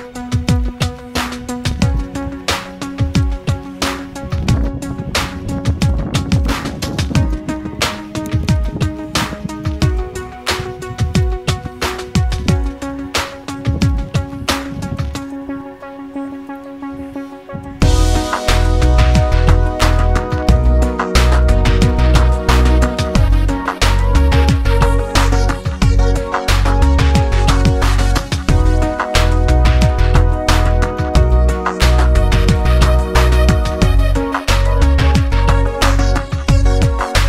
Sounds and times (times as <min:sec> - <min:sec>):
Music: 0:00.0 - 0:37.2.